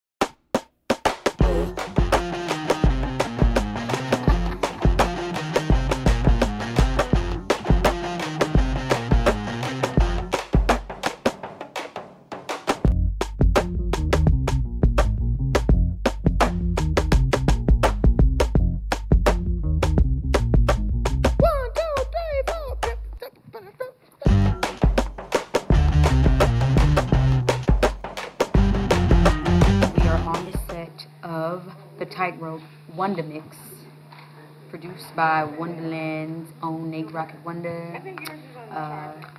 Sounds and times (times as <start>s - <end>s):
Music: 0.2s - 23.2s, 24.3s - 30.8s
Speech: 30.0s - 33.9s.